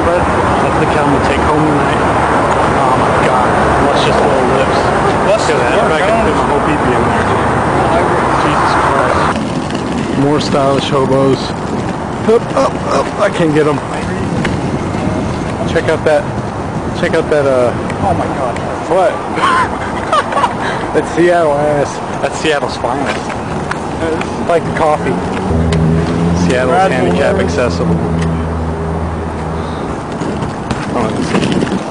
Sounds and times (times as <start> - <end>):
Speech: 0.0 - 2.0, 2.8 - 9.4, 10.2 - 11.6, 26.4 - 28.0, 30.9 - 31.4.